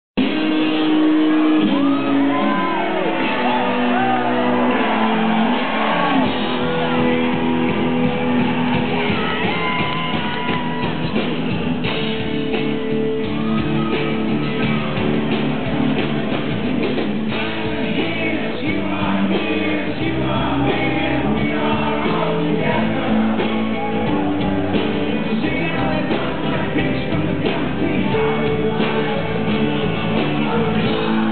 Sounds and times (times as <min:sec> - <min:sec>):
Crowd: 0:00.0 - 0:31.3
Psychedelic rock: 0:00.2 - 0:31.3
Shout: 0:00.8 - 0:11.1, 0:13.2 - 0:15.2.